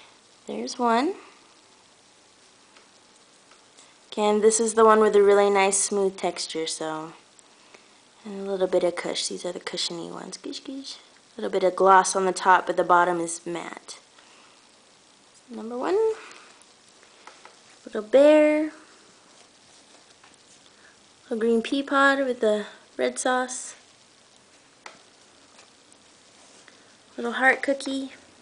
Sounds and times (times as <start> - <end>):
Inside, small room: 0.0 - 28.4
Speech: 0.5 - 1.3, 4.1 - 7.2, 8.2 - 14.0, 15.5 - 16.3, 17.8 - 18.8, 21.3 - 23.8, 27.2 - 28.2.